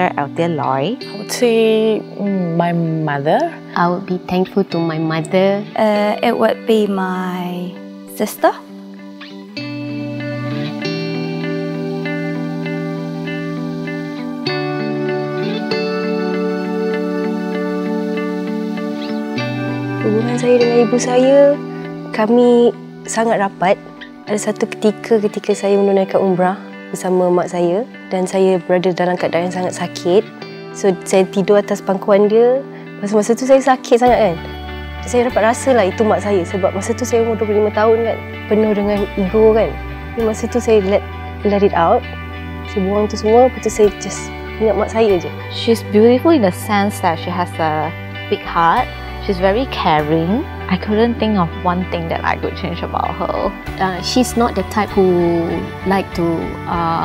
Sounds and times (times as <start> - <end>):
Speech: 0.0 - 8.6, 22.2 - 34.4, 35.0 - 42.0, 42.7 - 57.0
Music: 0.0 - 57.0.